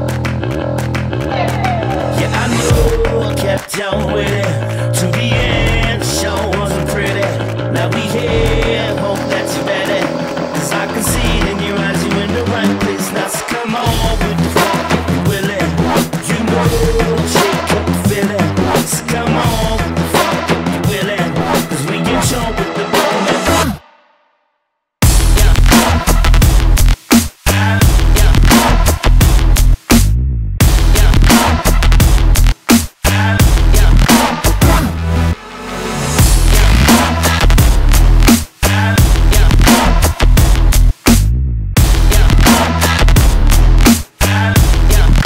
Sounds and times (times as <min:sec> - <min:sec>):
Drum and bass: 0:00.0 - 0:23.8, 0:25.0 - 0:45.2.